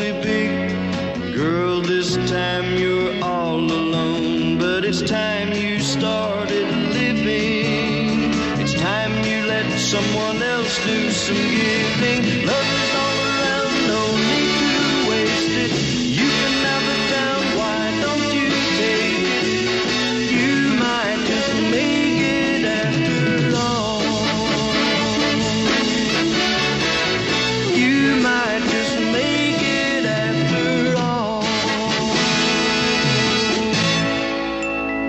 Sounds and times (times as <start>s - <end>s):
Music: 0.0s - 35.0s.